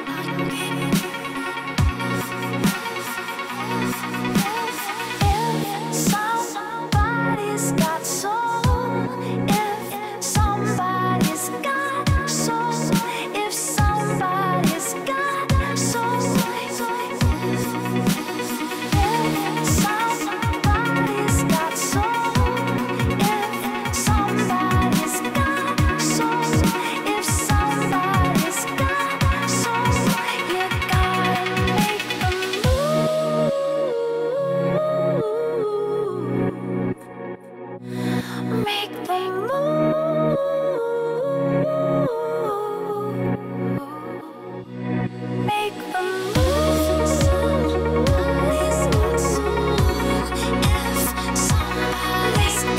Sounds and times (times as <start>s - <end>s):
Electronic music: 0.0s - 52.7s.